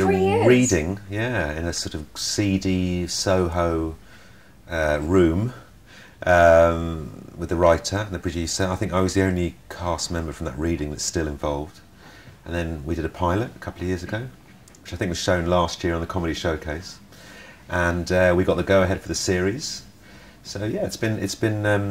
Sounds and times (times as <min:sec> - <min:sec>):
Speech: 0:00.0 - 0:04.0, 0:04.7 - 0:11.8, 0:12.4 - 0:17.0, 0:17.7 - 0:21.9.